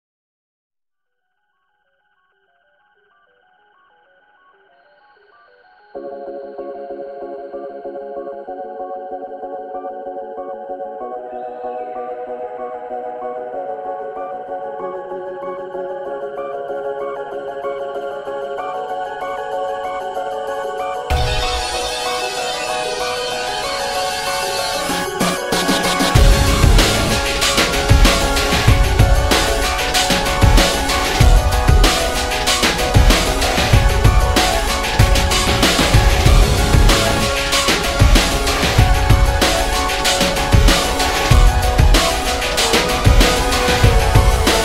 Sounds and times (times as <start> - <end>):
Music: 1.2 - 44.6.